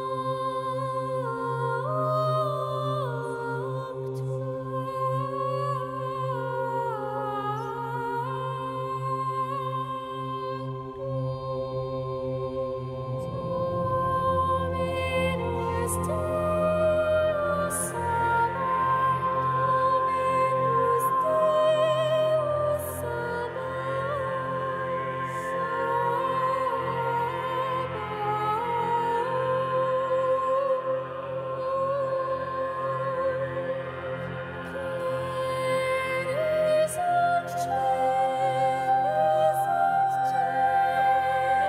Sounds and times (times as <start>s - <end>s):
Opera: 0.0s - 41.6s
Singing: 0.0s - 41.6s.